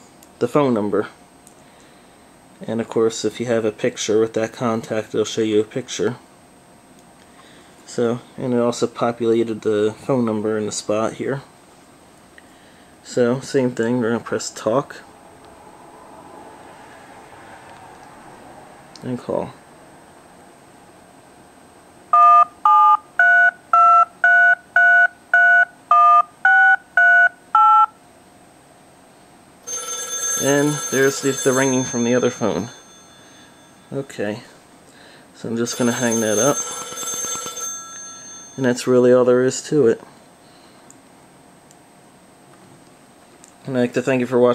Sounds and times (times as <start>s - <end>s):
Speech: 0.4s - 1.2s, 2.6s - 6.2s, 7.9s - 11.5s, 13.0s - 15.1s, 19.0s - 19.6s, 30.4s - 32.7s, 33.9s - 34.6s, 35.4s - 36.6s, 38.6s - 40.1s, 43.6s - 44.5s
Telephone: 22.1s - 27.9s, 29.7s - 34.0s, 35.7s - 38.7s.